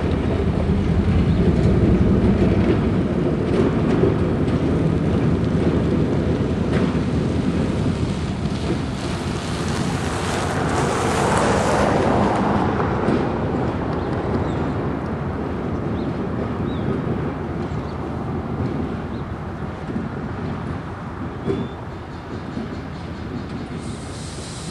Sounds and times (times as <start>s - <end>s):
Railroad car, train wagon: 0.0s - 24.7s
Train: 0.0s - 24.7s.